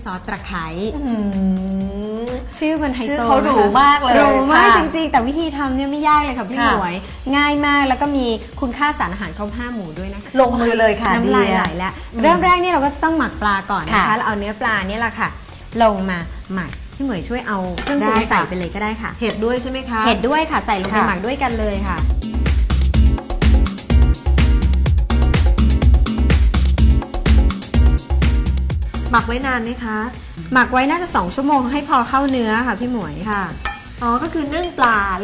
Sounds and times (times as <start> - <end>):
Music: 0.0 - 35.2
Speech: 6.1 - 8.0, 10.4 - 12.7.